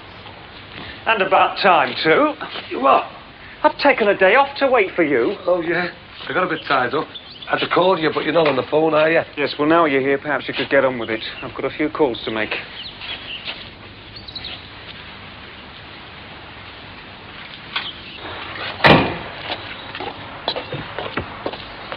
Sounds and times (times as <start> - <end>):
Speech: 1.1 - 12.7
Chirp, tweet: 6.6 - 7.7, 12.2 - 13.6, 14.2 - 14.6.